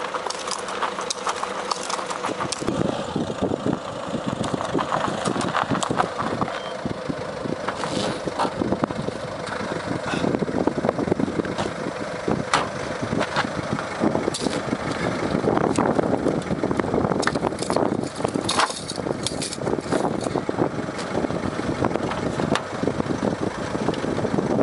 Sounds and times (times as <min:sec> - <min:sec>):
Car: 0:00.0 - 0:24.6.